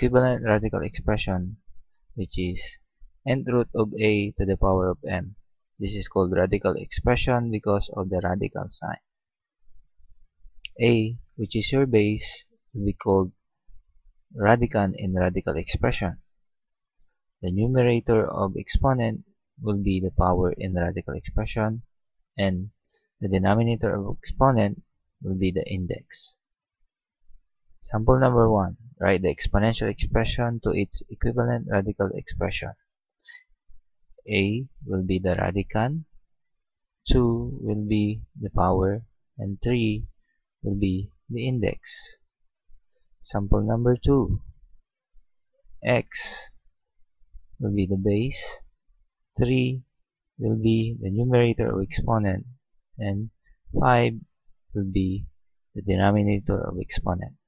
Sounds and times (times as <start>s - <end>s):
Speech: 0.0s - 9.1s, 10.7s - 13.4s, 14.3s - 16.3s, 17.4s - 26.4s, 27.8s - 32.9s, 34.2s - 36.2s, 37.0s - 42.3s, 43.2s - 44.6s, 45.8s - 46.6s, 47.6s - 48.7s, 49.4s - 57.4s.